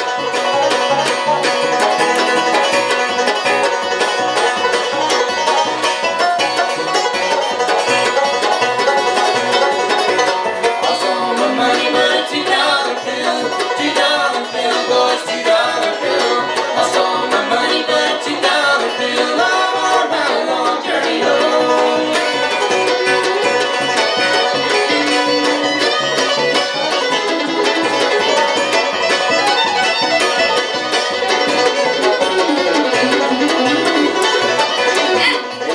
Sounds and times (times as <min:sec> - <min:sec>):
Bluegrass: 0:00.0 - 0:35.7.